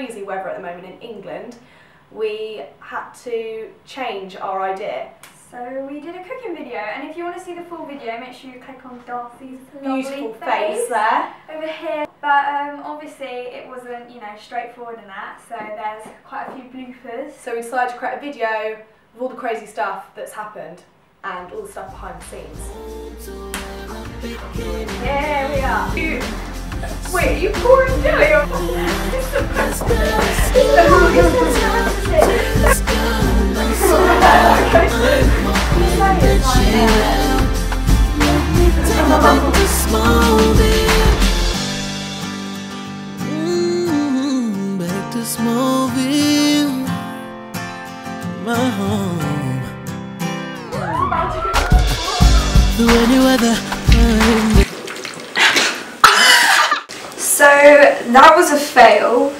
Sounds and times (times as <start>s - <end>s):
Speech: 2.2s - 22.6s, 27.1s - 29.2s, 30.4s - 32.8s, 35.8s - 37.4s, 57.2s - 59.3s
Music: 21.9s - 54.7s.